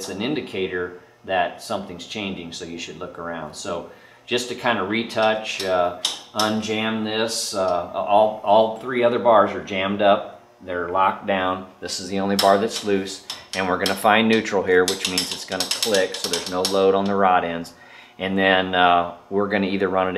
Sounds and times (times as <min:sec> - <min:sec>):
Speech: 0:00.0 - 0:20.1.